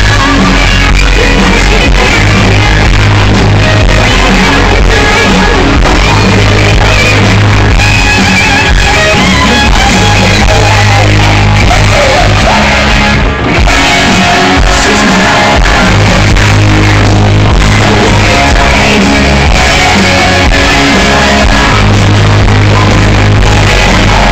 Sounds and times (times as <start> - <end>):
Singing: 0.0 - 7.8, 9.4 - 24.3
Crowd: 0.0 - 24.3
Rock music: 0.0 - 24.3.